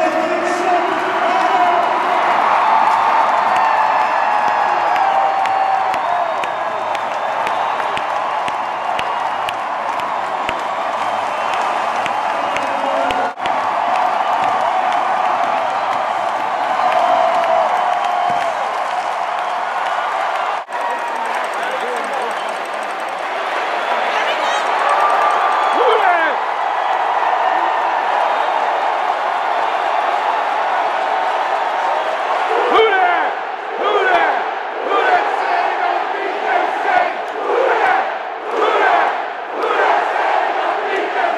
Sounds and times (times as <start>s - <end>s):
Speech: 0.0s - 2.3s, 21.1s - 22.6s, 32.5s - 37.1s.